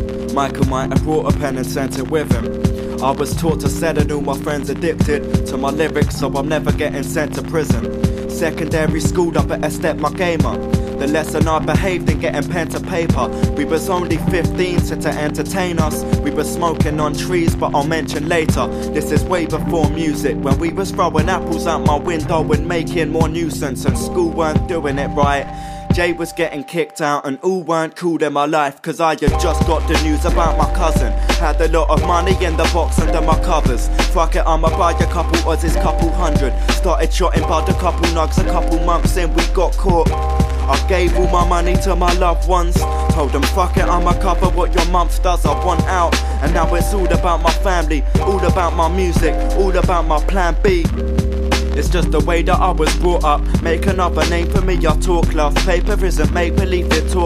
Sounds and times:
Music: 0:00.0 - 0:57.2.

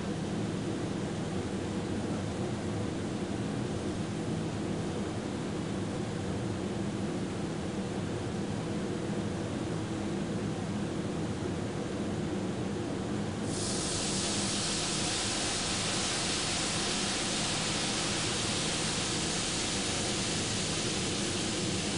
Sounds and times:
White noise: 0:00.0 - 0:05.6, 0:13.4 - 0:21.9.

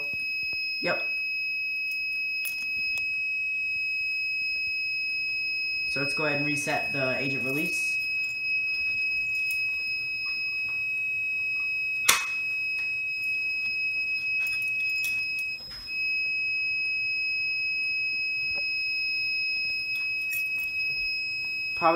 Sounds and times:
Fire alarm: 0:00.0 - 0:21.9.

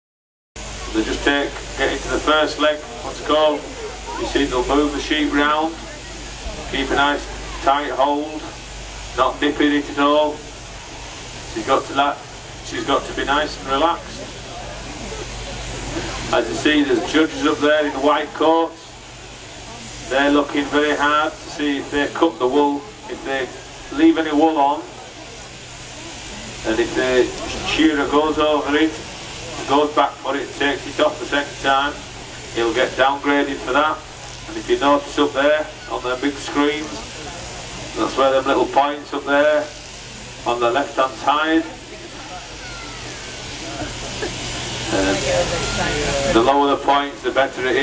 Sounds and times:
Speech: 0:00.7 - 0:10.5, 0:11.5 - 0:19.0, 0:19.6 - 0:39.8, 0:40.4 - 0:44.0, 0:44.8 - 0:47.8.

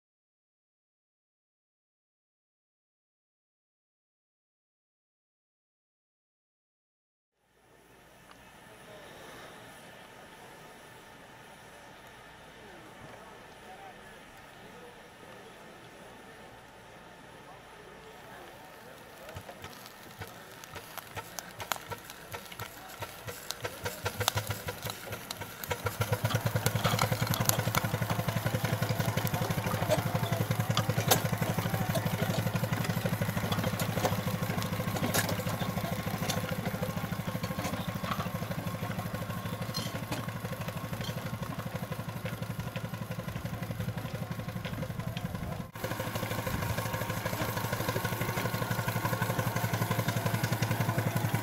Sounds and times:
Vehicle: 0:07.4 - 0:51.4
Idling: 0:07.7 - 0:51.4.

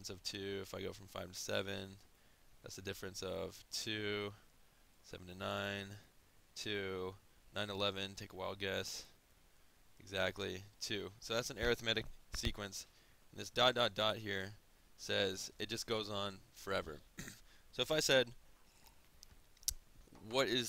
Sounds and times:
Speech: 0:00.0 - 0:02.0, 0:02.6 - 0:04.4, 0:05.1 - 0:09.2, 0:10.0 - 0:17.1, 0:17.8 - 0:18.4, 0:20.2 - 0:20.6.

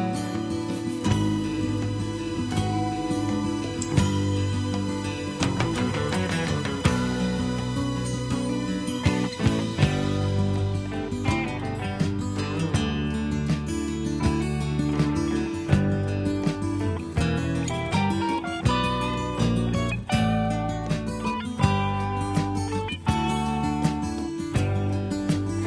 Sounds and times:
Music: 0:00.0 - 0:25.6.

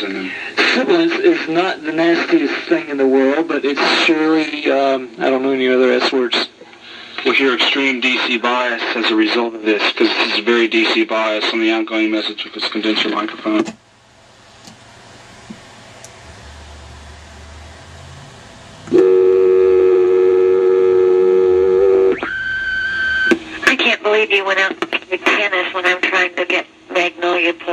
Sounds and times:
Speech: 0:00.0 - 0:06.6, 0:07.2 - 0:13.7, 0:23.7 - 0:27.7.

